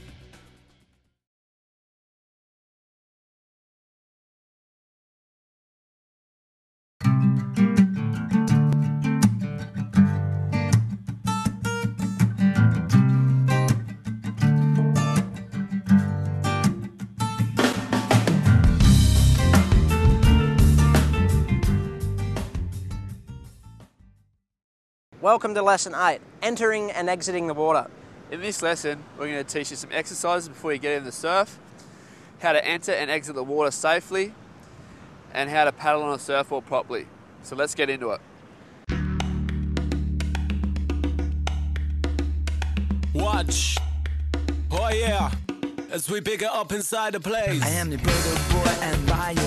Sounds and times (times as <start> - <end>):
Music: 0.0 - 1.2, 7.0 - 24.4, 38.9 - 49.4.